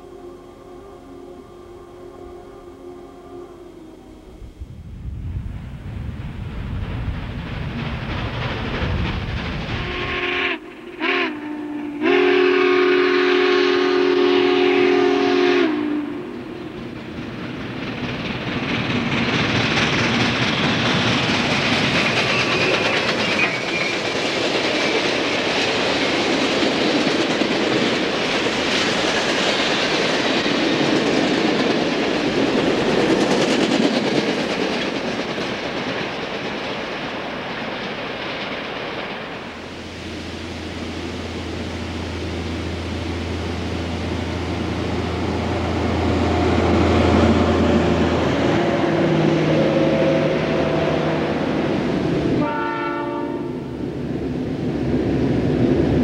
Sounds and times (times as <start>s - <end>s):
Railroad car, train wagon: 0.0s - 56.0s
Train: 0.0s - 56.0s
Clickety-clack: 6.8s - 10.1s, 16.7s - 39.5s.